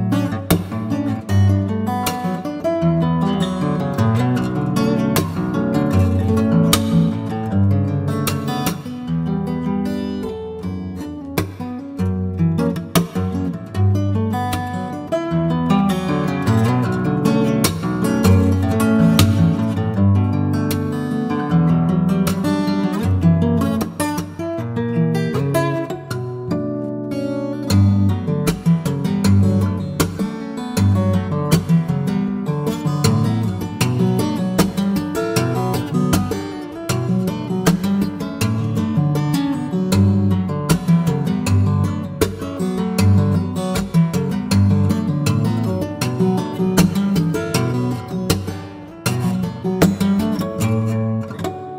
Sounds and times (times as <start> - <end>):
Acoustic guitar: 0.0 - 51.7.